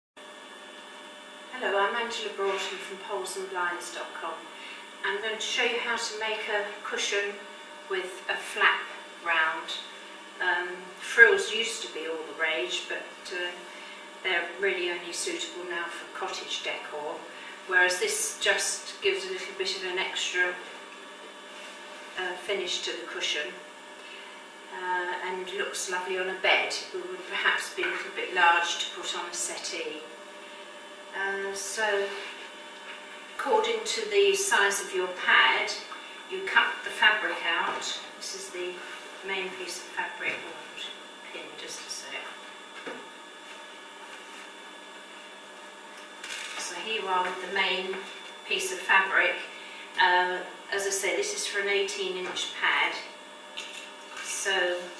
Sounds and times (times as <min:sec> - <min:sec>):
Speech: 0:01.5 - 0:13.6, 0:14.2 - 0:20.7, 0:22.2 - 0:23.6, 0:24.7 - 0:30.1, 0:31.2 - 0:32.2, 0:33.4 - 0:42.4, 0:46.6 - 0:53.1, 0:54.3 - 0:54.9.